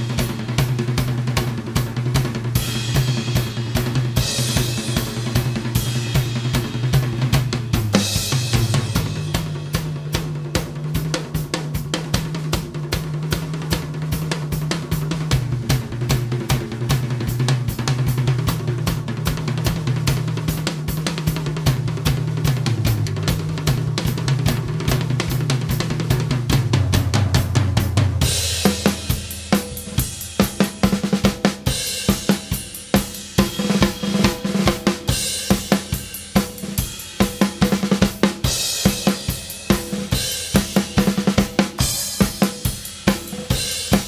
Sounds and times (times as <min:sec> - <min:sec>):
Bass drum: 0:00.0 - 0:44.0
Drum kit: 0:00.0 - 0:44.0
Drum roll: 0:00.0 - 0:44.0.